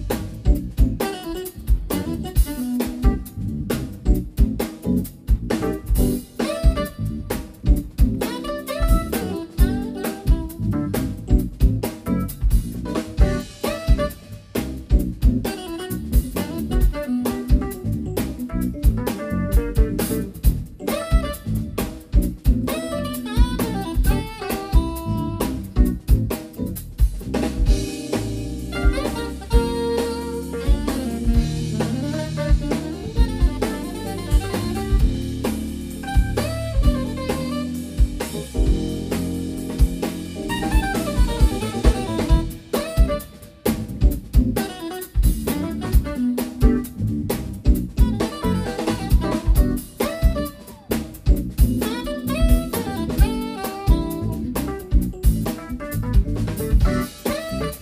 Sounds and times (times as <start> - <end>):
Jazz: 0.0 - 57.8.